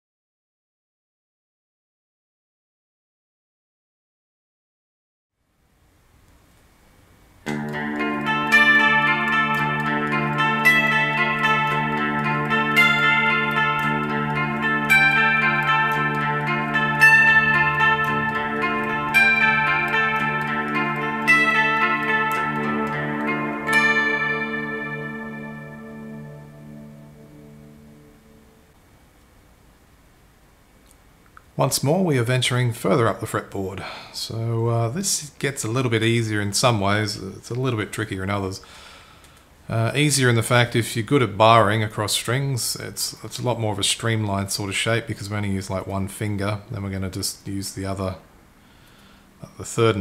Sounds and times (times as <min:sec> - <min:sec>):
Inside, small room: 0:05.3 - 0:50.0
Guitar: 0:07.4 - 0:28.8, 0:49.4 - 0:50.0.